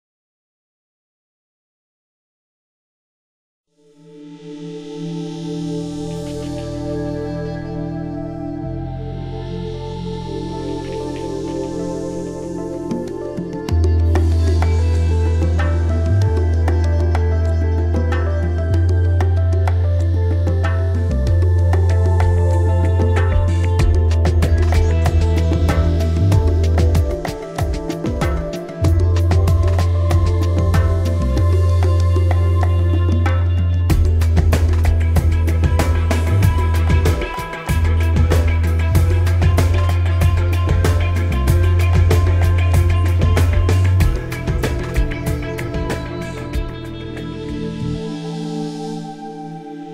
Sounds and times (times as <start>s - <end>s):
New-age music: 3.8s - 49.9s.